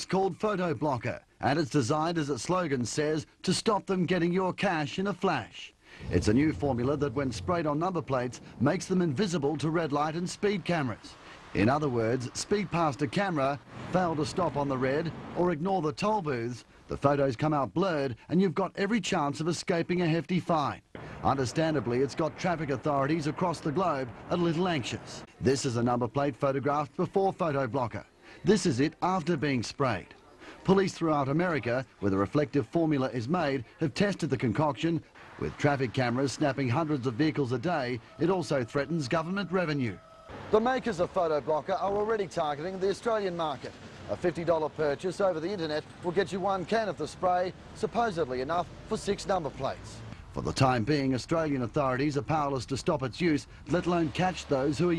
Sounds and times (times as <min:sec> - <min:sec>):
Speech: 0:00.0 - 0:40.0, 0:40.6 - 0:54.9.